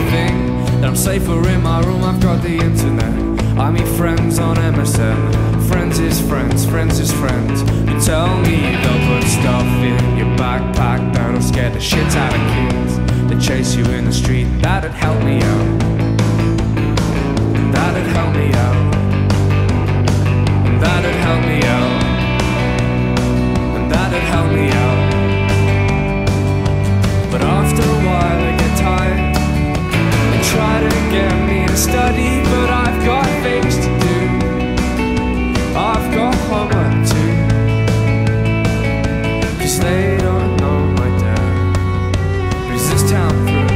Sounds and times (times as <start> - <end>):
Music: 0.0 - 43.7.